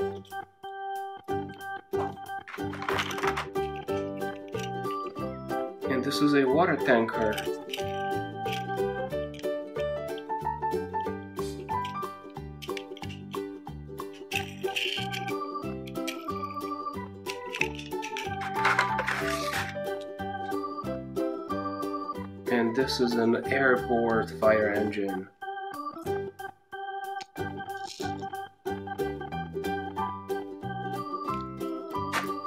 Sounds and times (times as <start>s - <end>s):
Music: 0.0s - 32.4s
Speech: 5.9s - 7.5s, 22.5s - 25.3s.